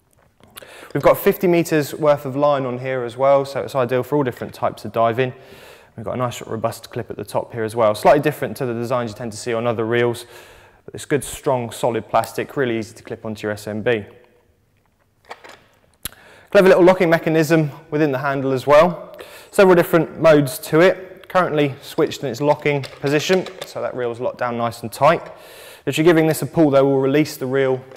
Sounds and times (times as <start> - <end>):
Speech: 0.9 - 5.4, 6.0 - 10.3, 10.9 - 14.1, 16.5 - 27.9.